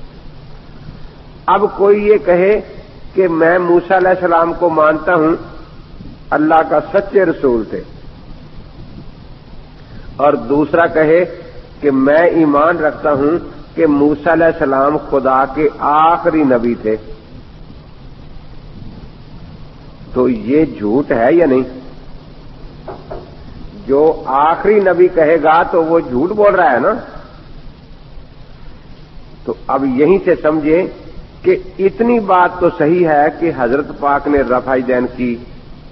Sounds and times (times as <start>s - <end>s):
Speech: 1.5s - 5.5s, 6.3s - 7.9s, 10.2s - 17.1s, 20.1s - 21.8s, 23.8s - 27.3s, 29.5s - 35.5s.